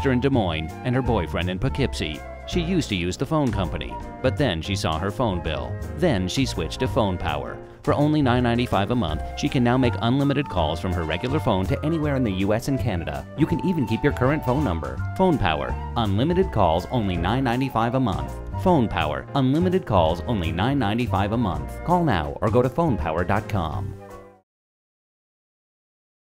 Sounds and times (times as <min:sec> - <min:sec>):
Speech: 0:00.0 - 0:23.9
Music: 0:00.0 - 0:24.5.